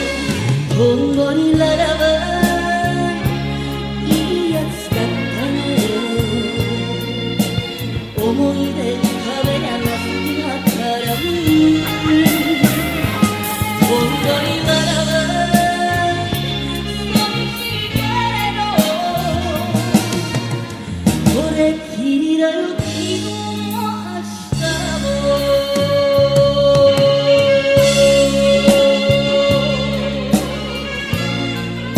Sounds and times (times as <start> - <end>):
Music: 0.0 - 31.9
Singing: 0.0 - 31.9.